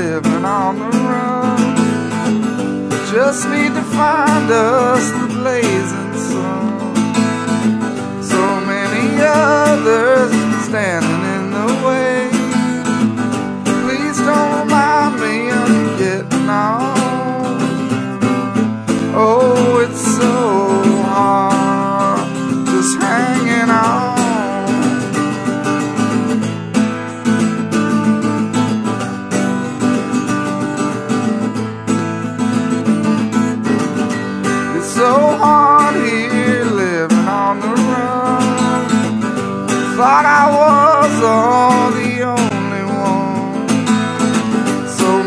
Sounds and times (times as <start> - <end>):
Music: 0.0 - 45.2.